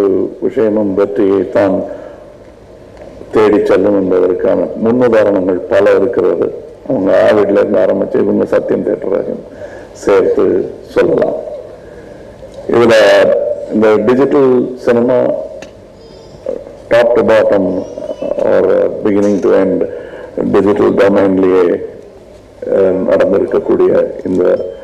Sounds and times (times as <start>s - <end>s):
Male speech, man speaking: 0.0s - 1.9s, 3.3s - 9.4s, 10.0s - 11.6s, 12.7s - 15.5s, 16.5s - 22.0s, 22.6s - 24.8s
Narration, monologue: 0.0s - 24.8s.